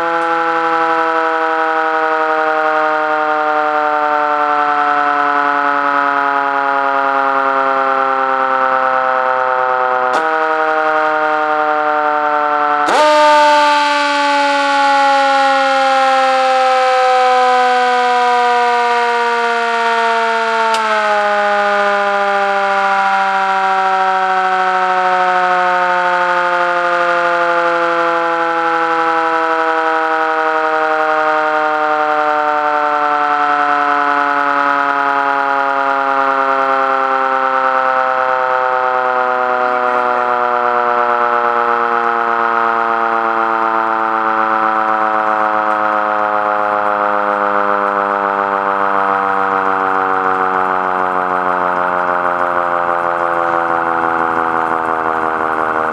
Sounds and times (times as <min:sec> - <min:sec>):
Siren: 0:00.0 - 0:55.9.